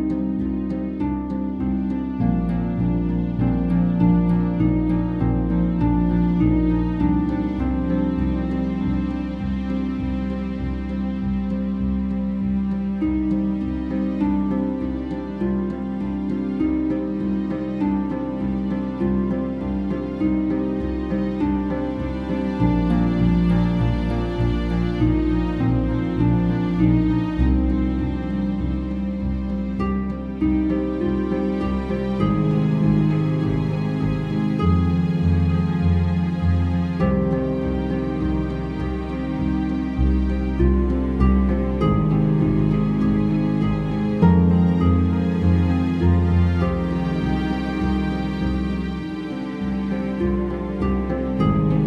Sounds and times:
Tender music: 0:00.0 - 0:51.8
Theme music: 0:00.0 - 0:51.8.

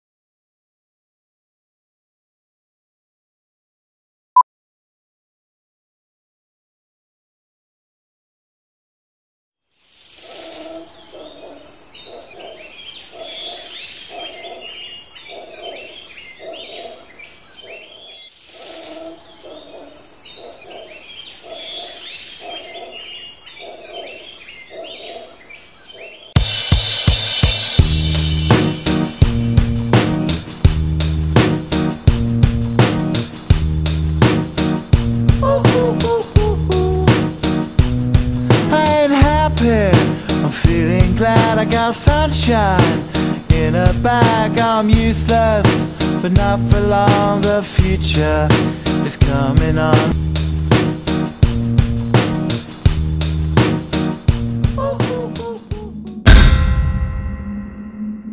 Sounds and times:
Outside, rural or natural: 0:09.6 - 0:58.3.

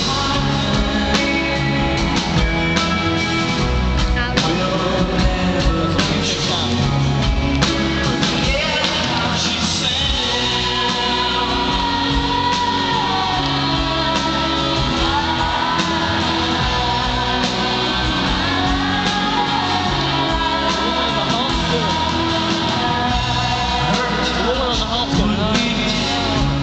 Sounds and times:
Male singing: 0:00.0 - 0:02.4, 0:04.2 - 0:07.0, 0:08.2 - 0:26.6
Music: 0:00.0 - 0:26.6.

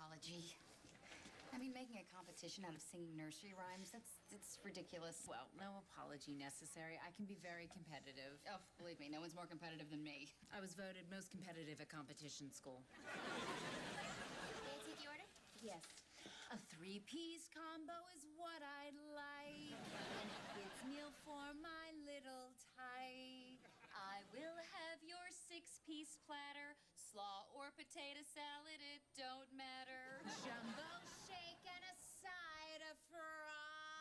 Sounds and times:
Female singing: 0:16.5 - 0:34.0.

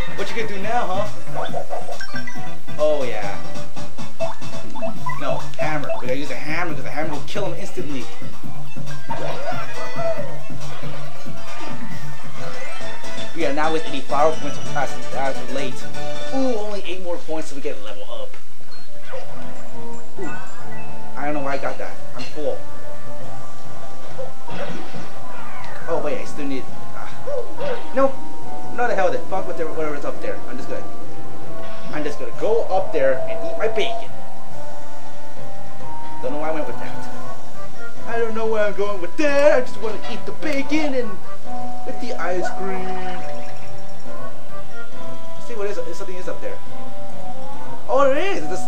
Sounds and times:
Music: 0:00.0 - 0:48.6
Speech: 0:05.2 - 0:08.1, 0:41.9 - 0:43.3, 0:45.4 - 0:46.6, 0:47.9 - 0:48.6.

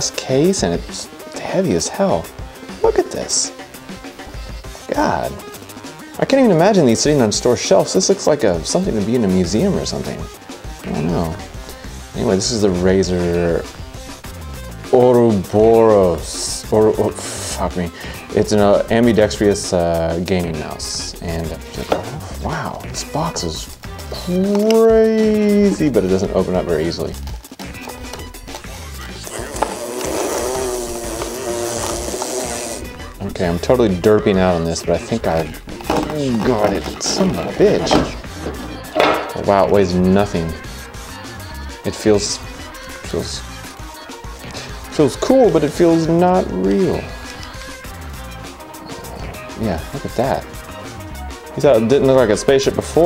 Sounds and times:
Speech: 0:00.0 - 0:03.5, 0:04.9 - 0:05.4, 0:06.2 - 0:11.4, 0:12.2 - 0:13.7, 0:14.9 - 0:27.2, 0:33.2 - 0:38.2, 0:39.3 - 0:40.6, 0:41.9 - 0:42.4, 0:43.0 - 0:43.4, 0:44.9 - 0:47.1, 0:49.6 - 0:50.5, 0:51.6 - 0:53.0
Music: 0:00.0 - 0:53.0.

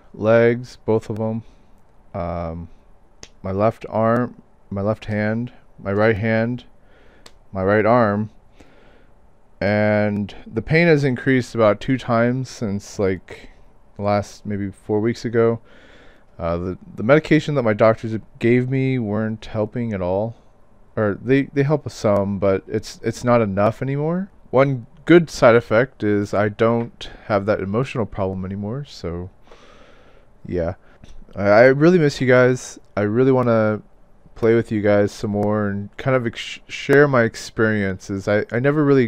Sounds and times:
Speech: 0:00.1 - 0:01.5, 0:02.2 - 0:06.7, 0:07.5 - 0:08.4, 0:09.6 - 0:15.6, 0:16.4 - 0:20.4, 0:21.0 - 0:29.4, 0:30.4 - 0:39.0.

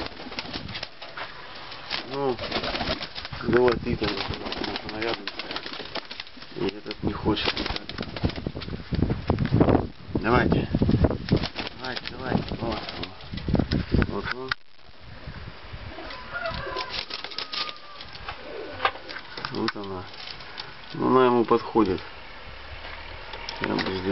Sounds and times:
Speech: 0:03.4 - 0:05.3, 0:06.6 - 0:07.9, 0:10.2 - 0:10.8, 0:11.8 - 0:13.2, 0:14.1 - 0:14.6, 0:19.5 - 0:20.1, 0:20.9 - 0:22.0, 0:23.6 - 0:24.1.

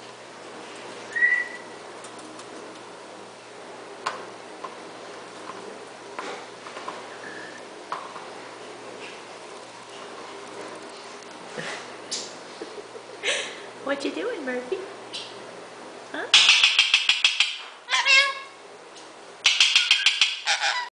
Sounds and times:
Speech: 0:13.8 - 0:14.9
Animal: 0:19.5 - 0:20.9.

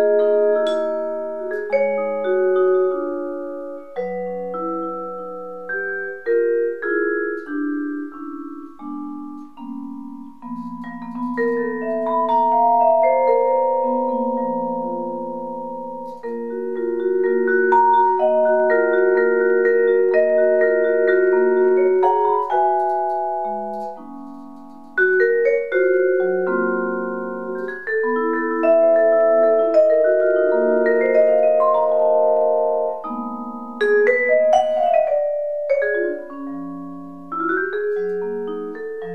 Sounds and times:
Inside, small room: 0:00.0 - 0:39.1
Vibraphone: 0:00.0 - 0:39.1.

